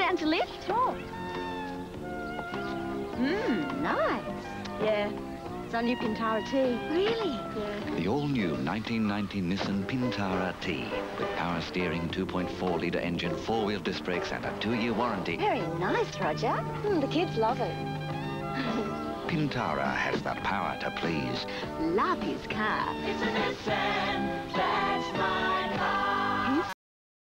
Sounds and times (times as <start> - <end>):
Music: 0.0 - 26.8.